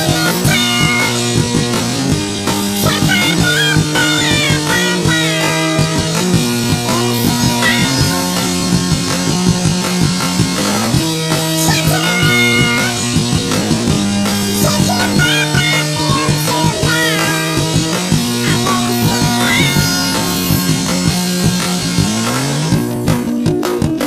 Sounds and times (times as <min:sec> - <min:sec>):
Music: 0:00.0 - 0:24.0.